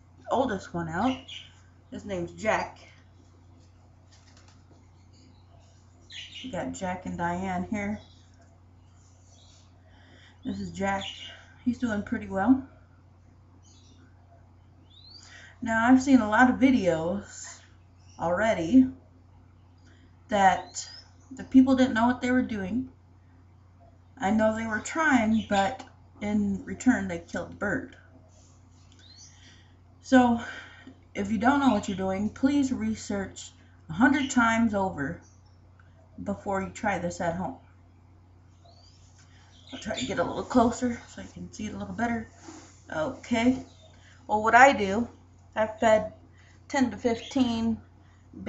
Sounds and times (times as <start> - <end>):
Inside, small room: 0.0 - 48.4
Speech: 0.3 - 3.0, 6.4 - 8.1, 10.5 - 12.7, 15.6 - 19.0, 20.3 - 22.9, 24.2 - 28.0, 30.1 - 30.6, 31.2 - 35.2, 36.2 - 37.6, 39.8 - 43.7, 44.3 - 47.8.